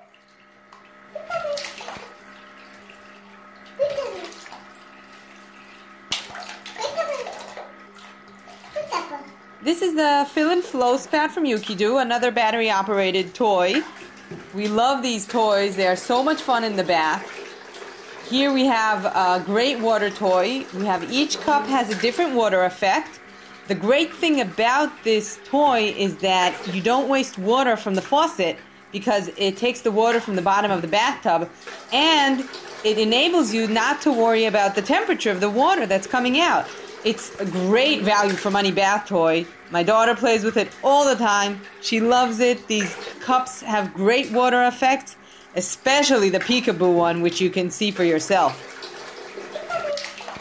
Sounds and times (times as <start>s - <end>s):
Bathtub (filling or washing): 0.0s - 50.4s
Water: 0.0s - 50.4s
Water tap, faucet: 0.0s - 50.4s.